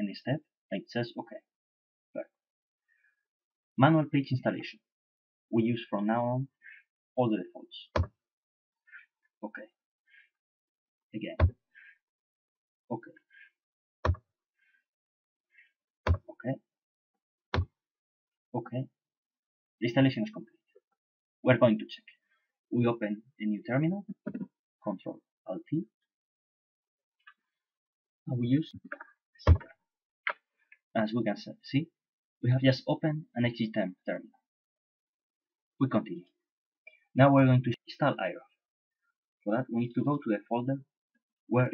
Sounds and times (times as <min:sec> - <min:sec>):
Speech: 0:00.0 - 0:01.5, 0:03.8 - 0:04.9, 0:05.5 - 0:06.6, 0:07.2 - 0:07.9, 0:09.4 - 0:09.8, 0:11.2 - 0:11.5, 0:12.9 - 0:13.1, 0:16.4 - 0:16.6, 0:18.6 - 0:18.9, 0:19.8 - 0:20.4, 0:21.4 - 0:25.9, 0:28.3 - 0:29.6, 0:30.9 - 0:34.4, 0:35.8 - 0:36.3, 0:37.2 - 0:38.6, 0:39.4 - 0:40.9, 0:41.5 - 0:41.7.